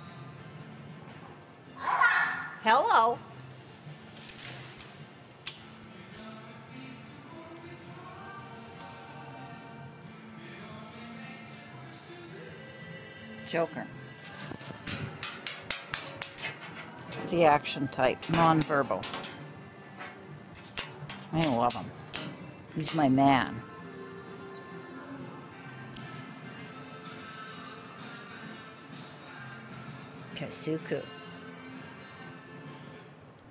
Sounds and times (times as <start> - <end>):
Music: 0.0 - 33.5
Speech: 17.2 - 19.1, 21.3 - 21.9, 22.8 - 23.6, 30.4 - 31.1.